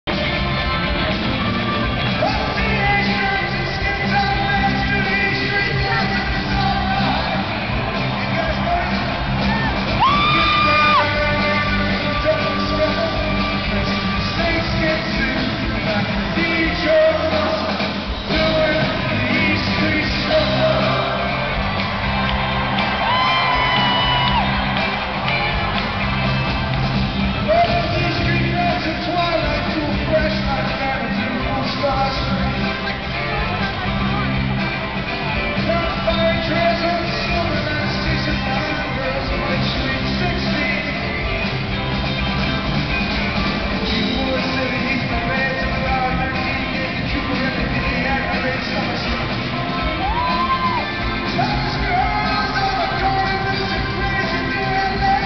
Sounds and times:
Music: 0.0 - 55.2
Speech: 2.1 - 7.3, 8.0 - 9.3, 10.3 - 21.3, 27.4 - 41.4, 43.8 - 49.5, 51.3 - 55.2.

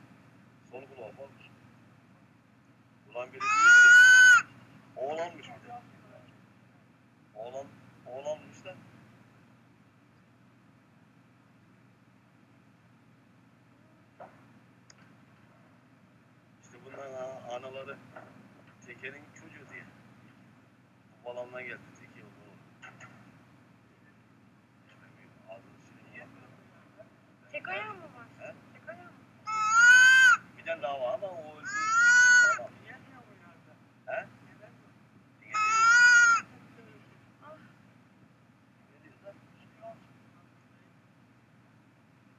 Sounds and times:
Speech: 0.7 - 1.5, 3.1 - 3.8, 5.0 - 6.3, 7.4 - 8.8, 16.6 - 18.1, 18.8 - 20.0, 21.2 - 22.6, 24.9 - 29.2, 30.6 - 31.7.

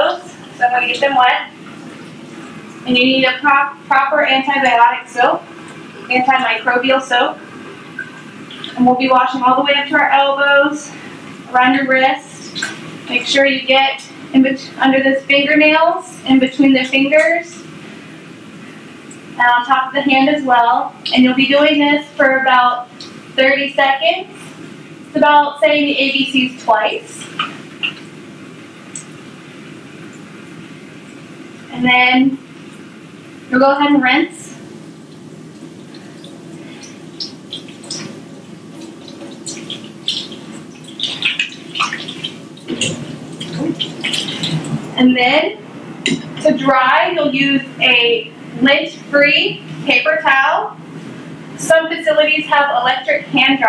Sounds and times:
Speech: 0.0 - 1.6, 2.8 - 7.4, 8.6 - 17.7, 19.4 - 24.5, 25.2 - 27.4, 31.7 - 32.4, 33.5 - 34.6, 43.6 - 50.8, 51.6 - 53.6.

